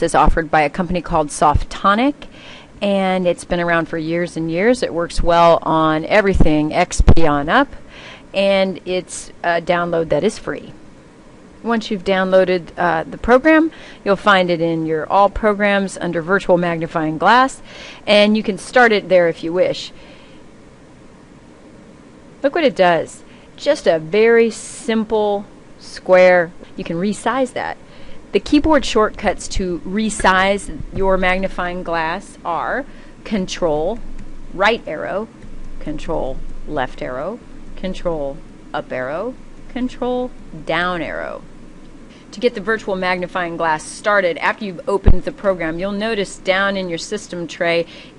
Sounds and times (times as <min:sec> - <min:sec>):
Speech: 0:00.0 - 0:07.8, 0:08.4 - 0:10.8, 0:11.6 - 0:19.9, 0:22.4 - 0:34.0, 0:34.6 - 0:41.4, 0:42.3 - 0:47.9.